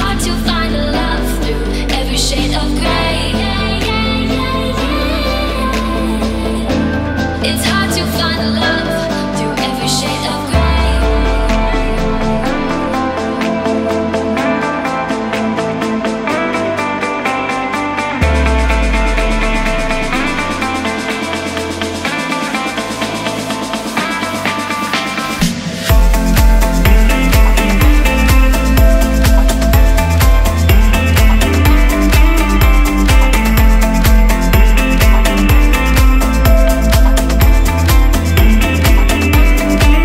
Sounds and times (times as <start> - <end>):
Music: 0.0 - 40.0.